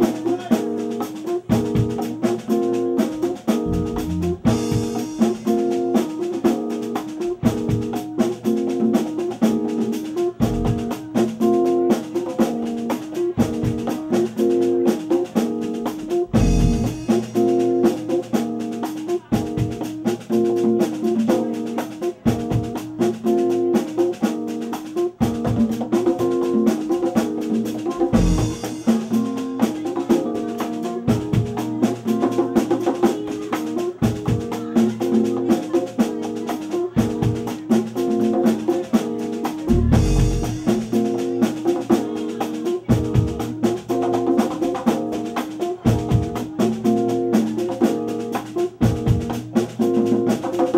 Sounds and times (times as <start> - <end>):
Speech: 0.0 - 25.2, 25.8 - 50.7
Drum kit: 0.0 - 50.7
Bass drum: 3.5 - 5.7, 10.4 - 11.0, 16.0 - 17.8, 28.0 - 29.2, 39.6 - 41.5.